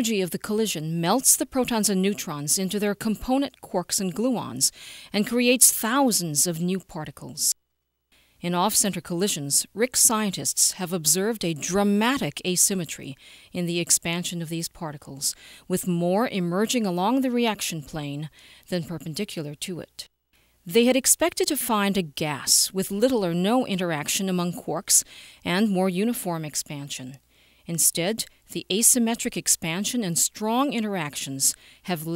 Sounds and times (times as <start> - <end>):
Speech: 0.0 - 7.5, 8.4 - 20.1, 20.7 - 32.1.